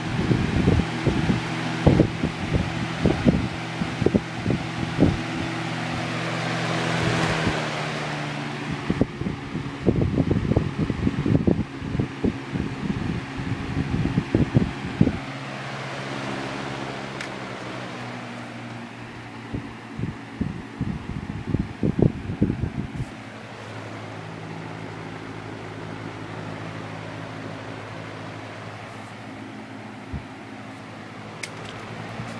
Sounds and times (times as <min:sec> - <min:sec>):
Mechanical fan: 0:00.0 - 0:32.3.